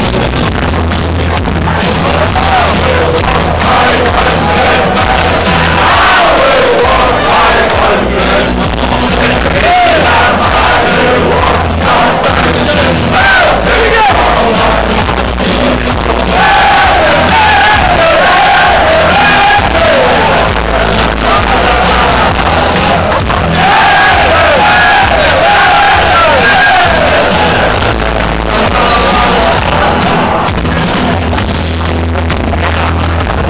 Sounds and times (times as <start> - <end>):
Music: 0.0 - 33.5
Male singing: 1.9 - 23.0, 23.6 - 30.3.